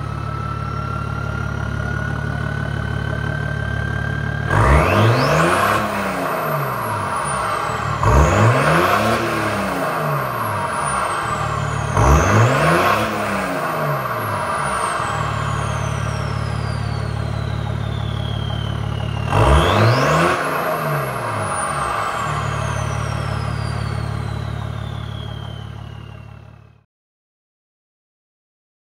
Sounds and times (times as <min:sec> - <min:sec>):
Car: 0:00.0 - 0:26.9
Accelerating, revving, vroom: 0:03.9 - 0:18.4, 0:19.1 - 0:25.3.